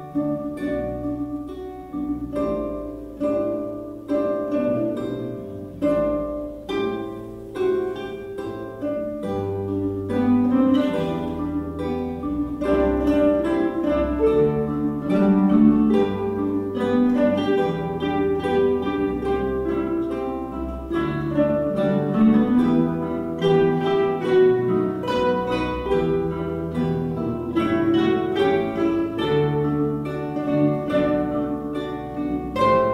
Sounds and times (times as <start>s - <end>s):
Acoustic guitar: 0.0s - 32.9s
Orchestra: 0.0s - 32.9s.